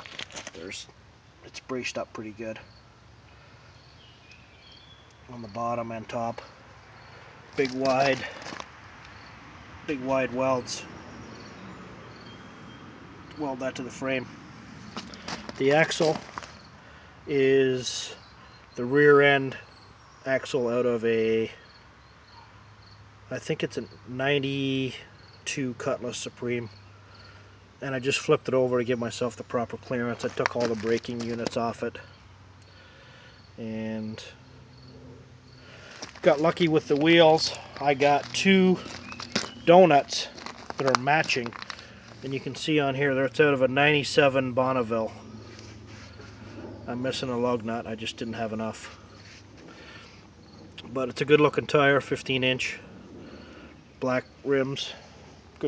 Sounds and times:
Speech: 0.6s - 2.7s, 5.3s - 6.5s, 7.6s - 8.4s, 9.9s - 10.9s, 13.3s - 14.3s, 15.6s - 16.2s, 17.3s - 18.2s, 18.8s - 19.7s, 20.3s - 21.6s, 23.3s - 26.7s, 27.8s - 32.1s, 33.6s - 34.4s, 36.2s - 39.0s, 39.7s - 41.6s, 42.2s - 45.2s, 46.9s - 49.0s, 50.8s - 52.8s, 54.0s - 55.0s.

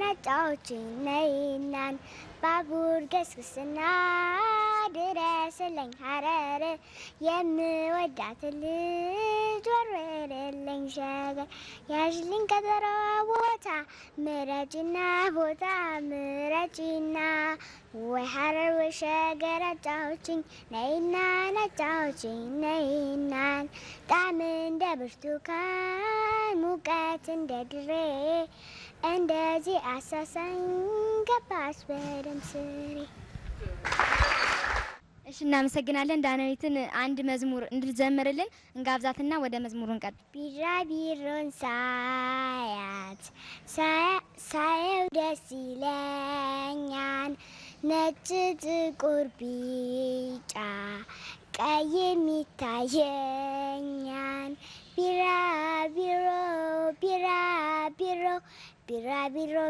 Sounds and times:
Child singing: 0.0s - 33.2s, 40.1s - 59.6s.

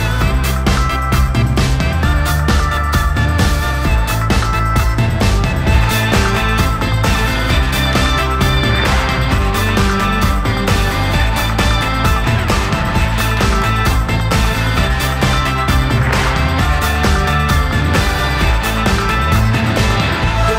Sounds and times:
Music: 0.0s - 20.5s.

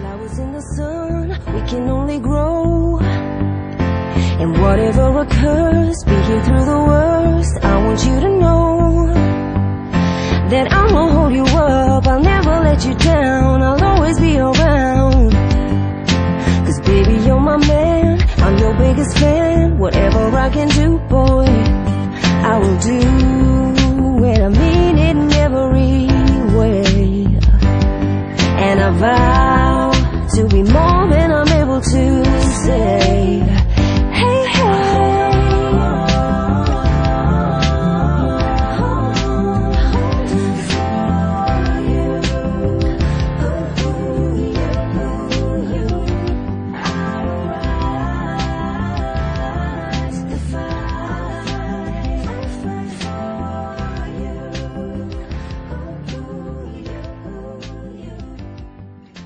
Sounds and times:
Music: 0.0s - 59.2s.

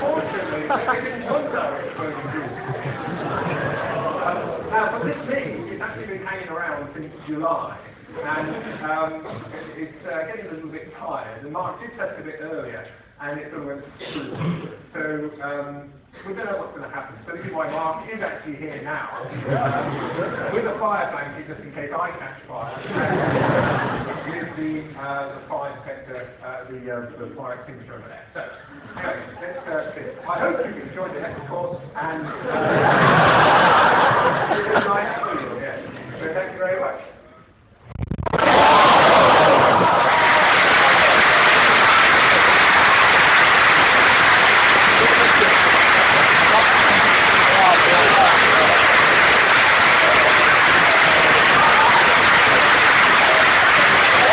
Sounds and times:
Speech: 0.0s - 2.9s, 4.0s - 23.0s, 24.2s - 32.6s, 34.4s - 37.5s.

